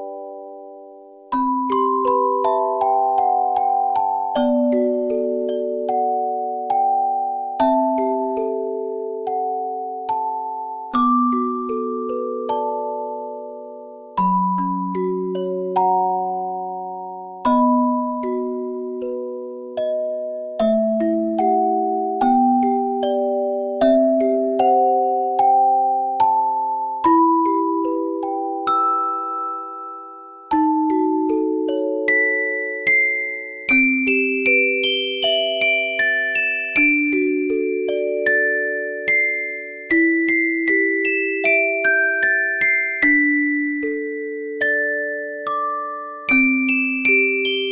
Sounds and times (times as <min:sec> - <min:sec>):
Music: 0:00.0 - 0:47.7.